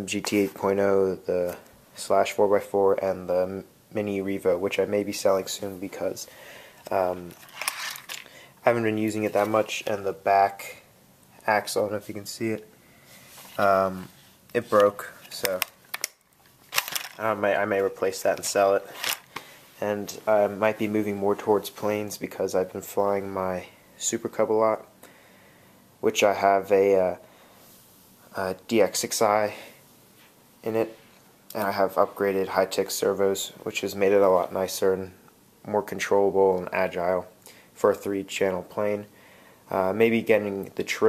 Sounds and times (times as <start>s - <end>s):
Speech: 0.0s - 6.3s, 6.9s - 7.4s, 8.6s - 12.7s, 13.6s - 15.7s, 17.2s - 18.9s, 19.8s - 24.9s, 26.0s - 27.3s, 28.3s - 29.8s, 30.6s - 41.0s.